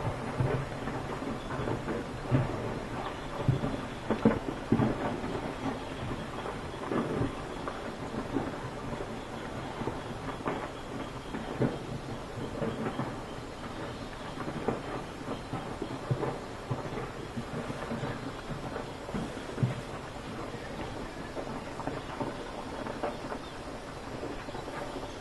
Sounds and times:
Eruption: 0.0 - 25.2.

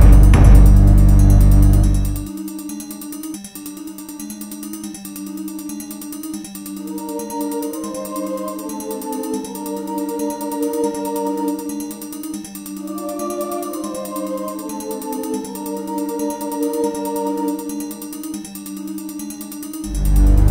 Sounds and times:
Synthesizer: 0.0 - 20.5.

